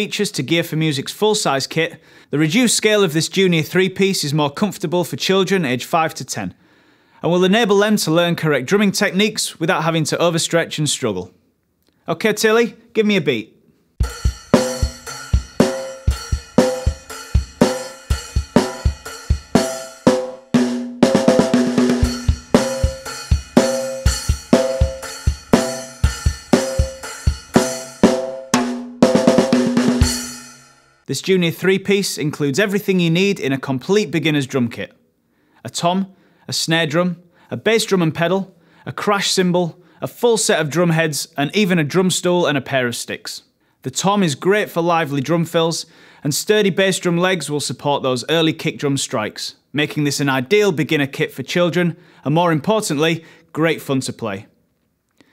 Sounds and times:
Drum: 0:14.0 - 0:30.7
Drum kit: 0:14.0 - 0:30.8.

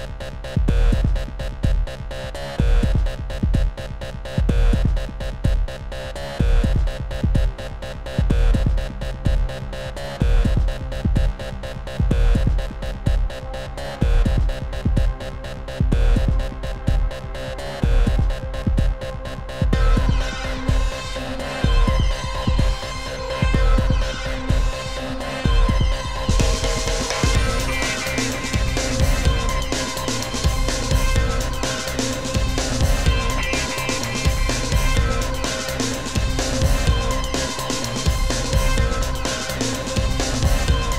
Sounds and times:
Music: 0:00.0 - 0:40.9.

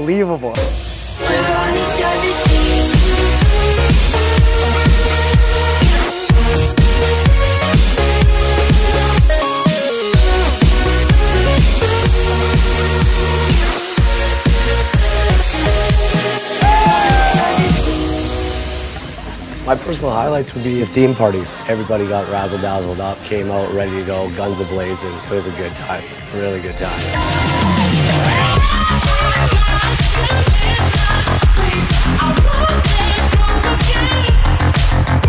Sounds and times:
Music: 0:00.0 - 0:35.2.

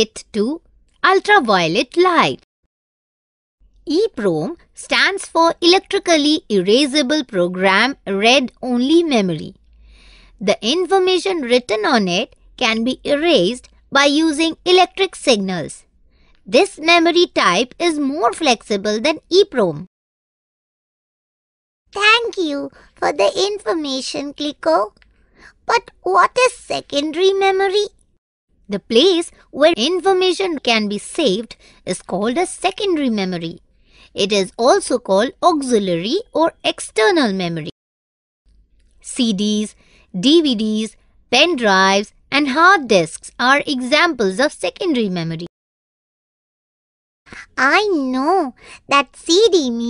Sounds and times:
Speech: 0:00.0 - 0:02.4, 0:03.9 - 0:09.6, 0:10.4 - 0:15.8, 0:16.5 - 0:19.9, 0:22.0 - 0:24.9, 0:25.7 - 0:27.9, 0:28.7 - 0:33.6, 0:34.2 - 0:37.8, 0:39.0 - 0:45.5, 0:47.3 - 0:49.8.

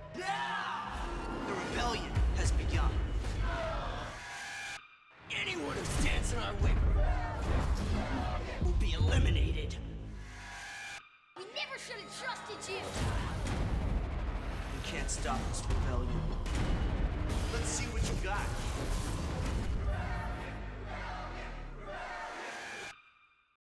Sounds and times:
Music: 0:00.0 - 0:23.6
Speech: 0:05.3 - 0:07.1, 0:08.6 - 0:09.9, 0:11.4 - 0:13.2, 0:14.8 - 0:16.3.

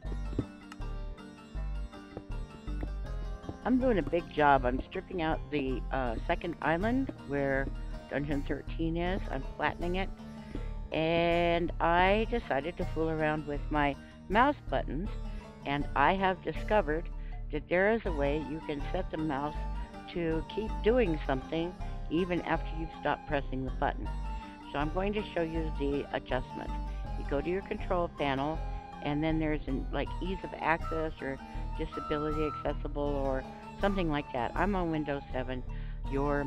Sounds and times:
Music: 0:00.0 - 0:36.4
Speech: 0:03.7 - 0:10.1, 0:11.0 - 0:15.1, 0:15.7 - 0:24.1, 0:24.7 - 0:36.4.

